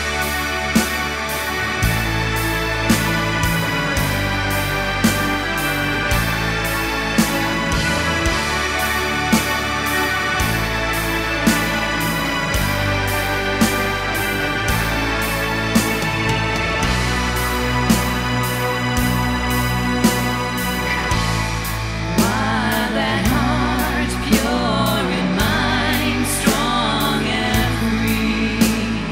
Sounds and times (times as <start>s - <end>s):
Folk music: 0.0s - 29.1s.